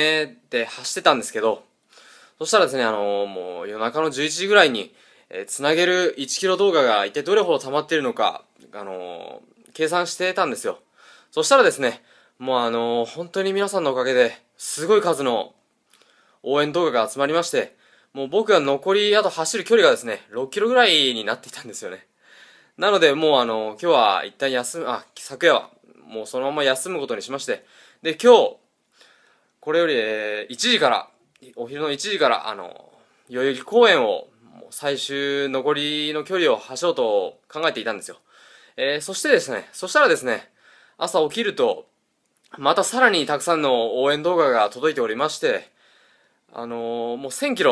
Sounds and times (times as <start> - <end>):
Speech: 0.0 - 1.7, 2.4 - 10.8, 11.4 - 15.6, 16.4 - 22.1, 22.8 - 28.6, 29.6 - 38.2, 38.8 - 41.9, 42.5 - 45.7, 46.5 - 47.7.